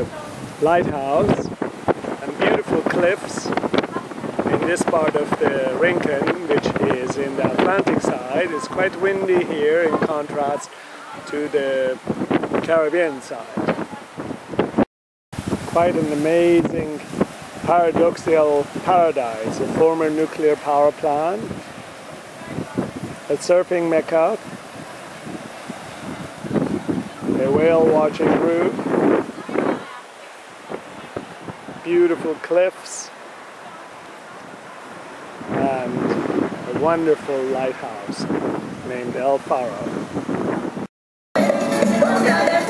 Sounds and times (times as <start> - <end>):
Wind noise (microphone): 0.0 - 10.6, 11.3 - 20.2, 21.3 - 23.3, 24.3 - 30.0, 30.7 - 31.9, 35.4 - 40.9.